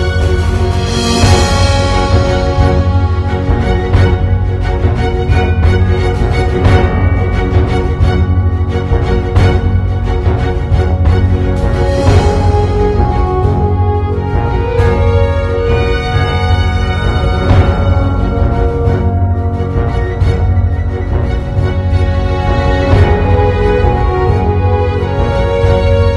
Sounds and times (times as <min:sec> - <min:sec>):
Theme music: 0:00.0 - 0:26.1.